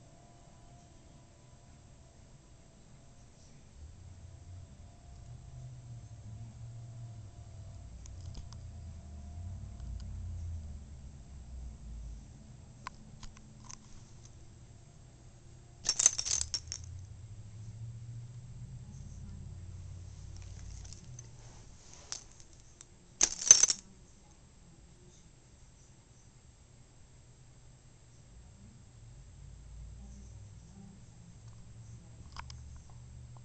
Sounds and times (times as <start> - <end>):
Keys jangling: 15.8 - 17.0, 22.0 - 23.8.